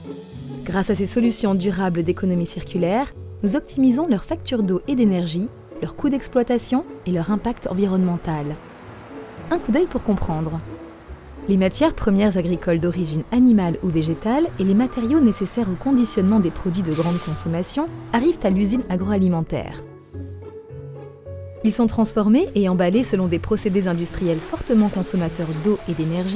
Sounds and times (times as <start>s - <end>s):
Music: 0.0s - 26.3s
Speech: 0.7s - 8.6s, 9.5s - 10.7s, 11.5s - 19.8s, 21.6s - 26.3s.